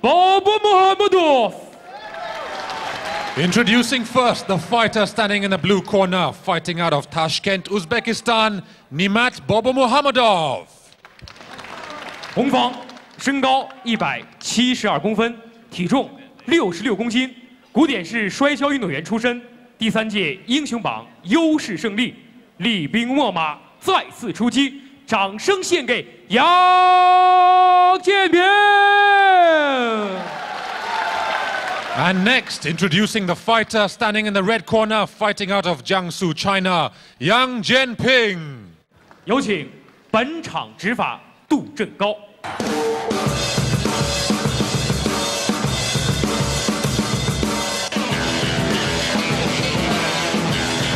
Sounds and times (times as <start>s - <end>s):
Speech: 0.0s - 1.7s, 3.4s - 10.9s, 12.4s - 30.3s, 32.0s - 42.3s.